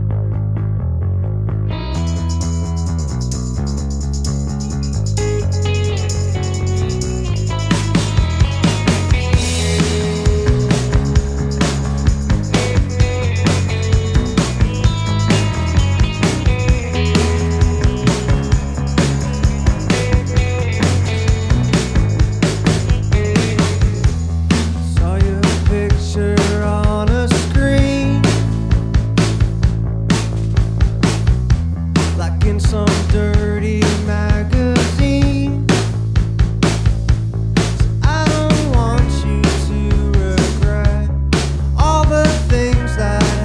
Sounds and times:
Music: 0.0 - 43.4.

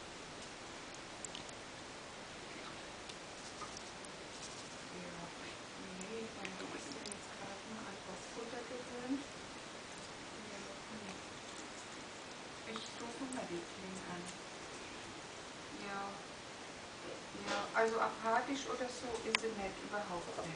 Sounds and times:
Speech: 4.9 - 9.3, 10.4 - 11.2, 12.7 - 14.4, 15.7 - 16.3, 17.0 - 20.5.

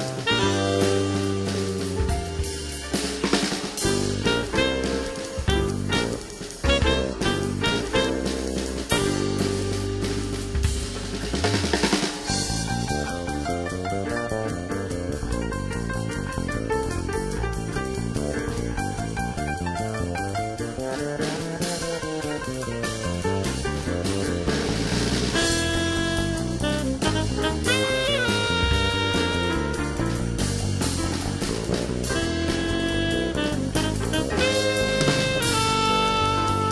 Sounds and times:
Music: 0.0 - 36.7.

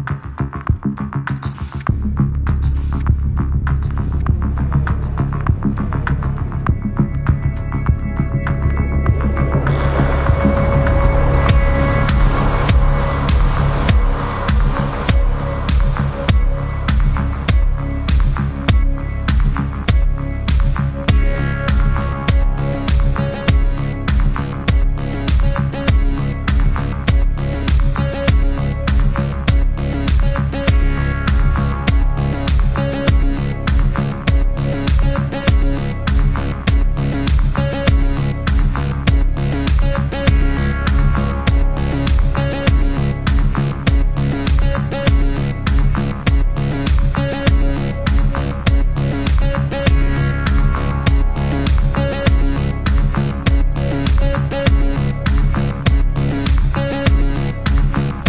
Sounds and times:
Music: 0.0 - 58.2.

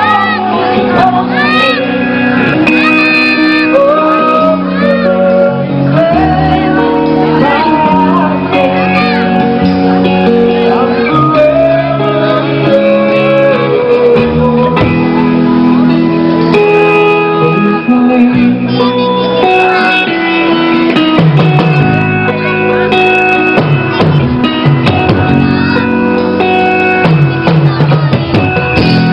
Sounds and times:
Singing: 0.0 - 15.2.

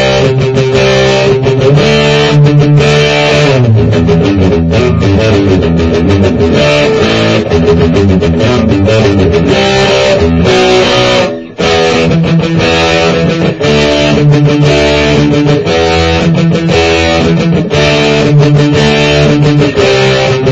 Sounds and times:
Strum: 0.0 - 20.5.

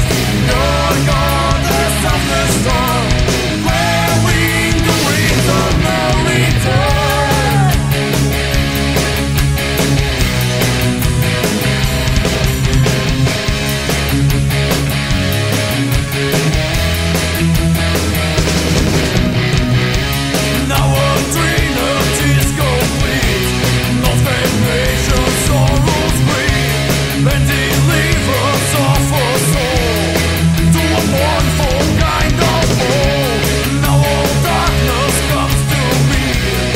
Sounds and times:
Progressive rock: 0.0 - 36.7.

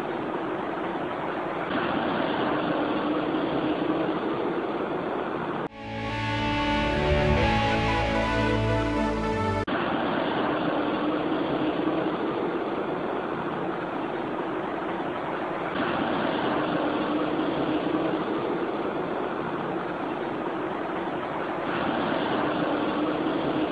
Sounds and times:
Guitar: 5.7 - 9.6.

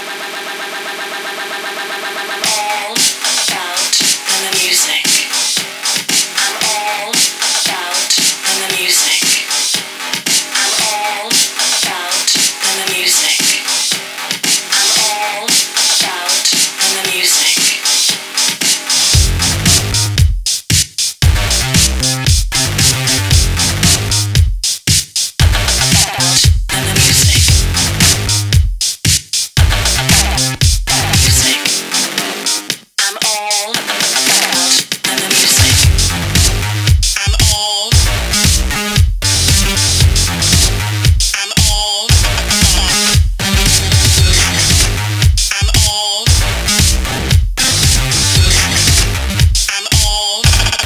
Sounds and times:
Disco: 0.0 - 50.8.

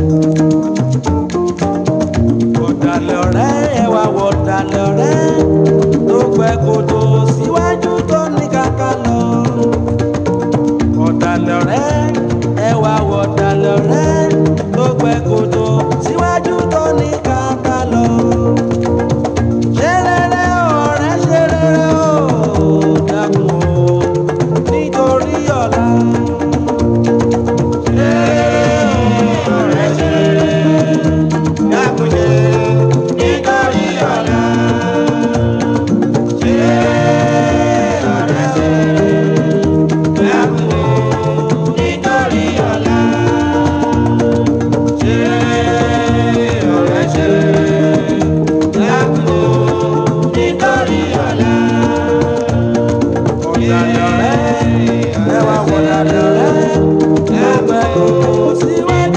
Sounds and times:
Music of Africa: 0.0 - 59.1.

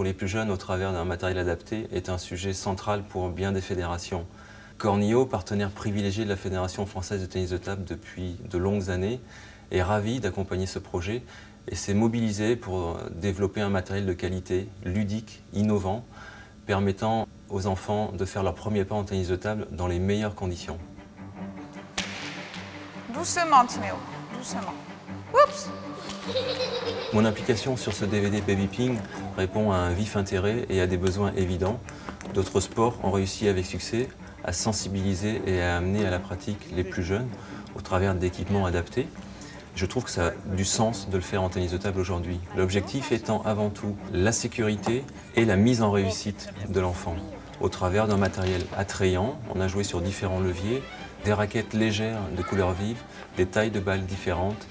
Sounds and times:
Music: 0.0 - 14.6, 18.0 - 54.7.

